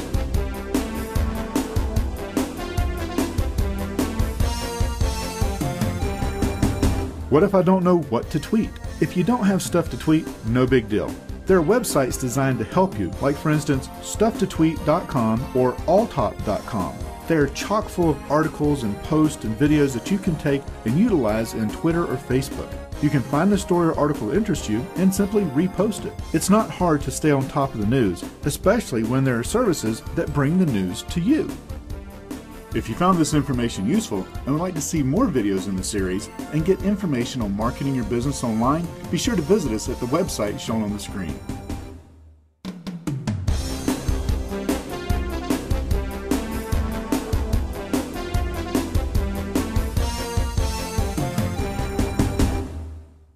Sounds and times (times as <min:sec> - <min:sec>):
Music: 0:00.0 - 0:53.3
Speech: 0:07.3 - 0:31.6, 0:32.8 - 0:41.4.